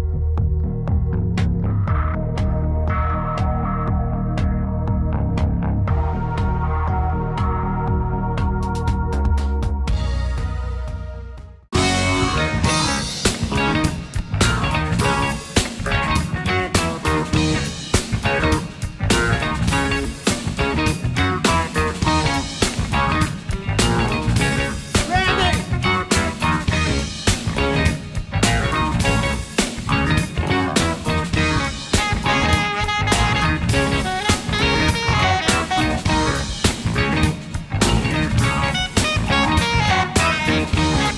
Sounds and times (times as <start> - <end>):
Music: 0.0 - 41.1
Speech: 25.0 - 25.9.